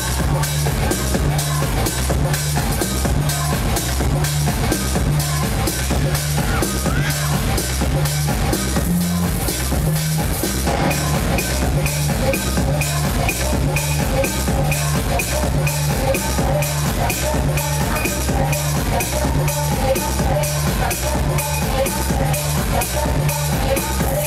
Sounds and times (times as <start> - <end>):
Techno: 0.0 - 24.2.